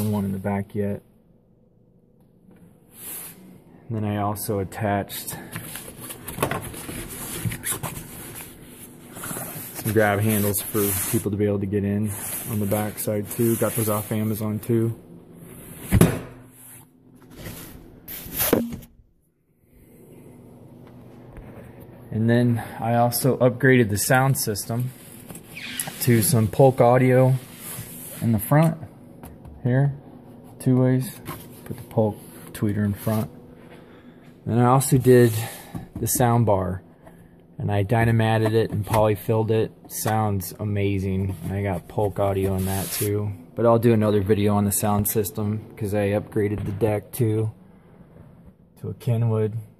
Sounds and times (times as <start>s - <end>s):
Speech: 0.0s - 1.1s, 3.9s - 5.6s, 9.8s - 15.0s, 22.1s - 25.0s, 25.9s - 27.5s, 28.2s - 28.9s, 29.6s - 30.0s, 30.6s - 33.3s, 34.4s - 36.8s, 37.6s - 47.6s, 48.8s - 49.7s.